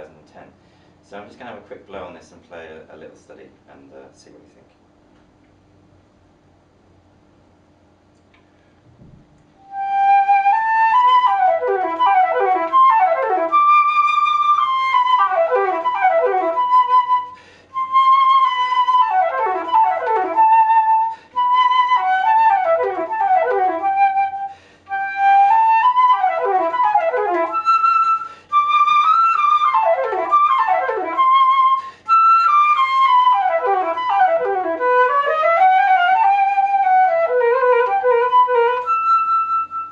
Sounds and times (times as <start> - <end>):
Flute: 9.6 - 39.9.